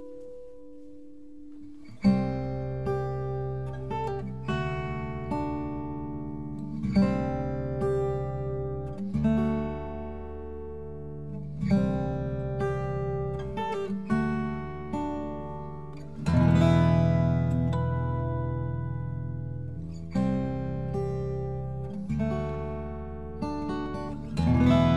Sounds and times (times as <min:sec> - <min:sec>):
Acoustic guitar: 0:00.0 - 0:24.9.